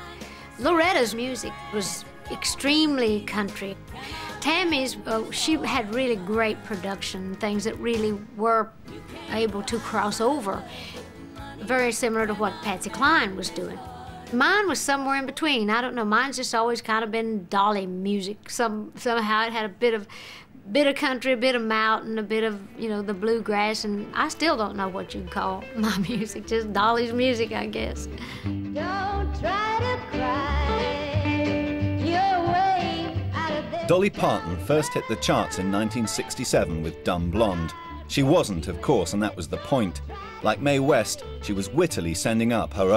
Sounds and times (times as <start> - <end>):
Speech: 4.4 - 8.7, 9.3 - 10.6, 20.7 - 28.1, 33.9 - 42.9.